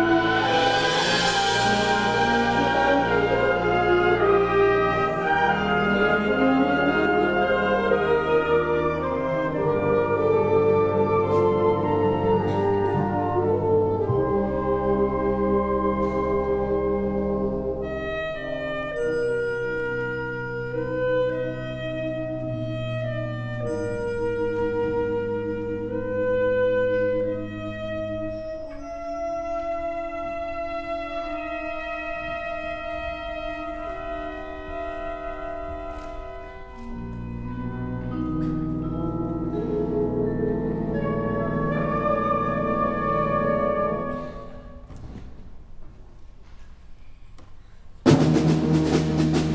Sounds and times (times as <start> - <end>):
Wind instrument, woodwind instrument: 0.0 - 45.5.